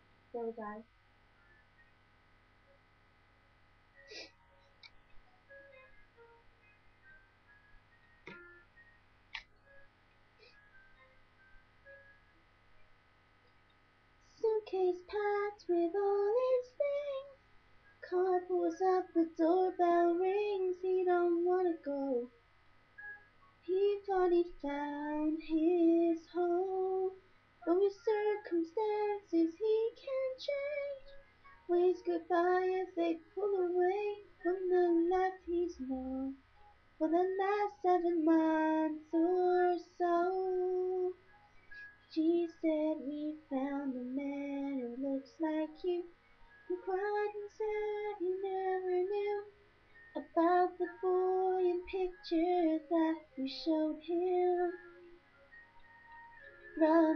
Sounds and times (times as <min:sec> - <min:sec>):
Female singing: 0:23.7 - 0:31.1, 0:31.7 - 0:36.4, 0:37.0 - 0:41.2, 0:46.7 - 0:49.5, 0:50.2 - 0:54.8, 0:56.8 - 0:57.1.